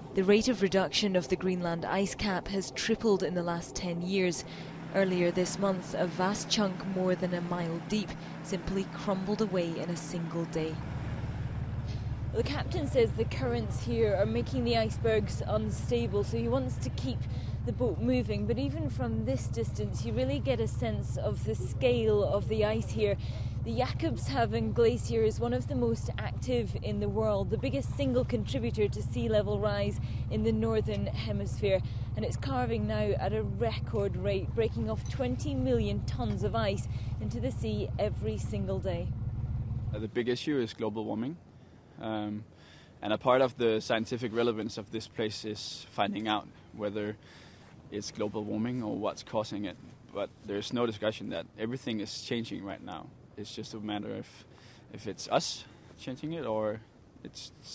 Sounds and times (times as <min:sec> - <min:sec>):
Vehicle: 0:00.0 - 0:57.7
Speech: 0:00.2 - 0:04.4, 0:05.0 - 0:10.8, 0:12.4 - 0:39.1, 0:43.0 - 0:47.2, 0:48.0 - 0:54.4, 0:55.0 - 0:57.7.